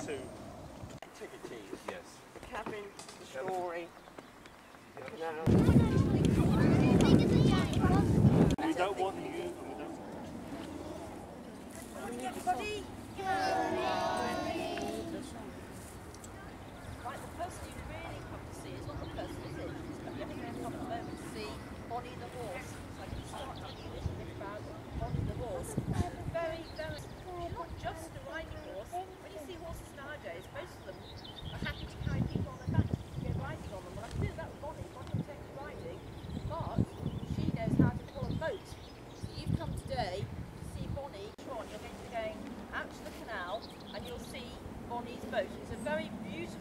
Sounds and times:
Speech: 0:11.8 - 0:15.6.

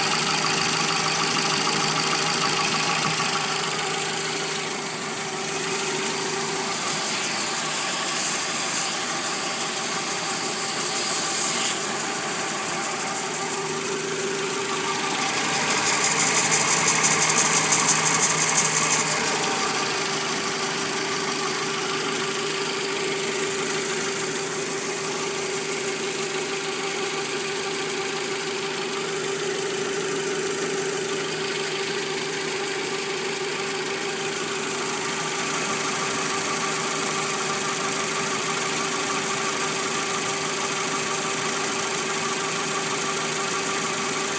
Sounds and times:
Engine: 0:00.0 - 0:44.3.

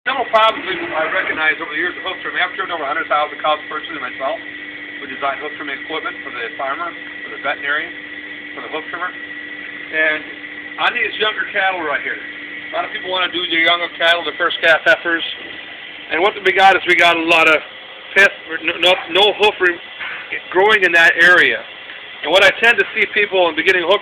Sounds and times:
Speech: 0:00.1 - 0:04.4, 0:05.0 - 0:08.0, 0:08.6 - 0:09.2, 0:09.9 - 0:15.4, 0:16.1 - 0:21.6, 0:22.2 - 0:24.0.

